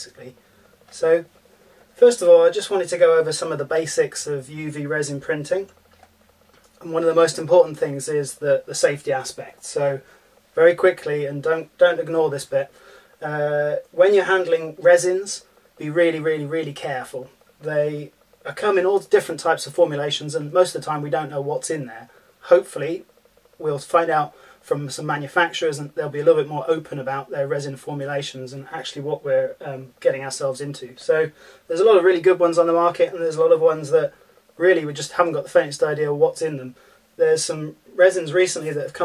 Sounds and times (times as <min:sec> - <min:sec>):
Speech: 0:00.0 - 0:01.3, 0:02.0 - 0:05.8, 0:06.8 - 0:39.0.